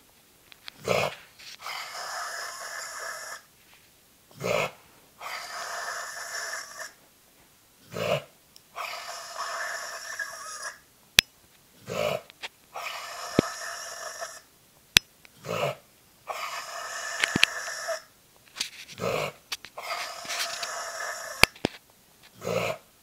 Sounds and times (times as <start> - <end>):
Dog: 18.9 - 21.4, 22.3 - 22.8.